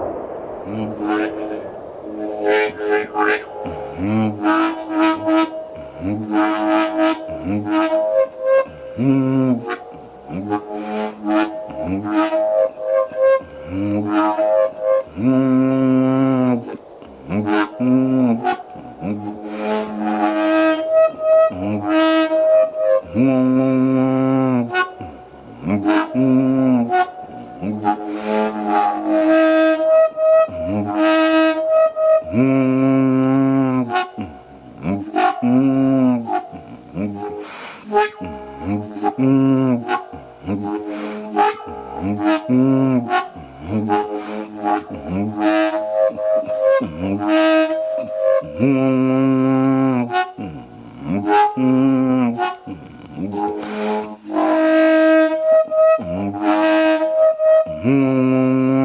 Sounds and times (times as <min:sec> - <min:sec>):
Shofar: 0:00.0 - 0:58.8
Wind instrument, woodwind instrument: 0:00.0 - 0:58.8.